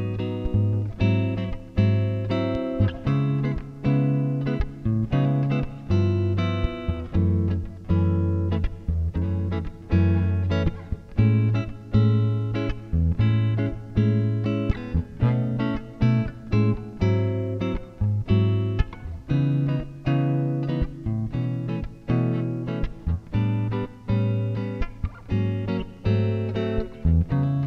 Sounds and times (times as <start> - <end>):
Bass guitar: 0.0 - 27.6
Strum: 0.0 - 27.6.